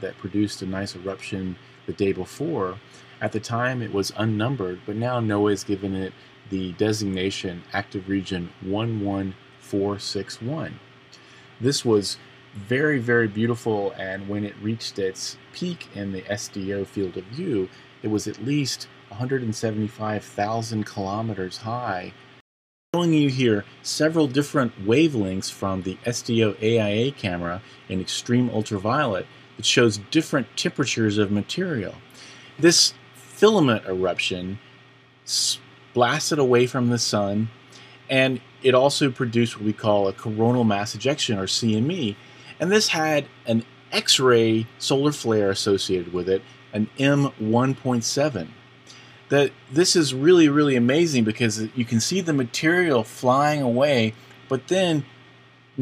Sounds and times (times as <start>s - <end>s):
Speech: 0.0s - 10.8s, 11.6s - 22.2s, 23.0s - 34.6s, 35.3s - 48.6s, 49.3s - 55.1s.